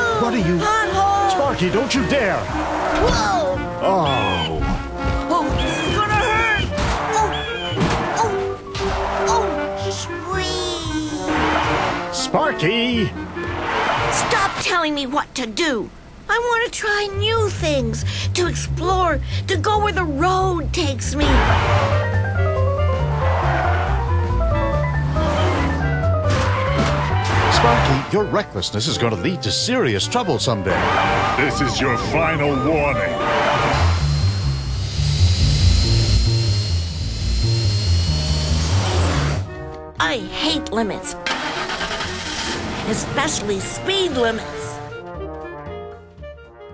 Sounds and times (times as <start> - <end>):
Music: 0.0 - 46.7.